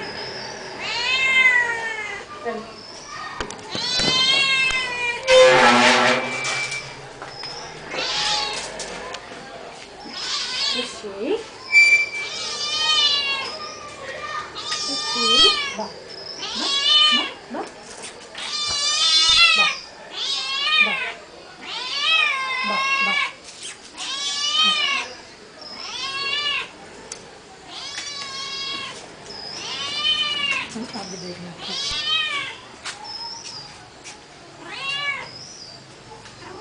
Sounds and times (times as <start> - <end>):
Speech: 10.7 - 11.5, 30.7 - 31.9.